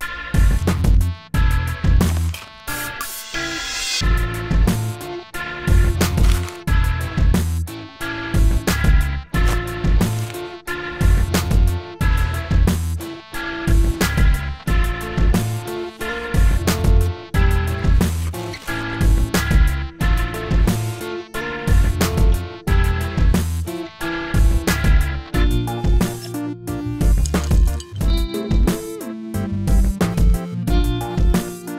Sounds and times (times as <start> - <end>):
Music: 0.0 - 31.7.